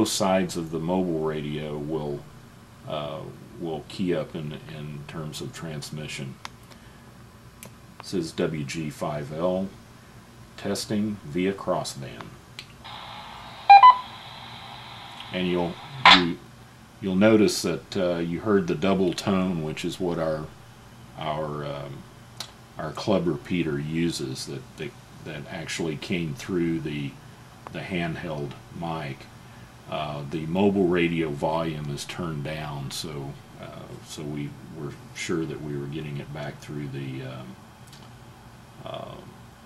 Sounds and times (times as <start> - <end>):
Speech: 0.0 - 6.4, 8.0 - 9.8, 10.6 - 12.4, 15.2 - 20.6, 21.2 - 22.1, 22.8 - 29.3, 29.9 - 37.6, 38.8 - 39.4.